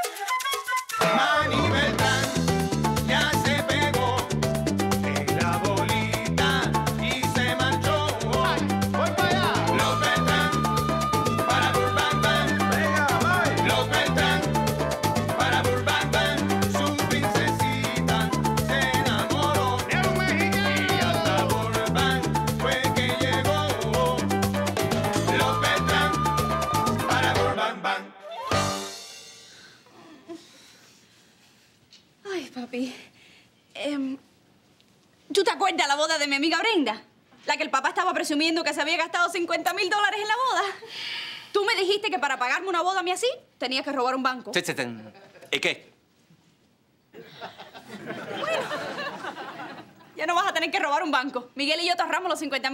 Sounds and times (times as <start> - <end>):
Music: 0.0 - 29.8.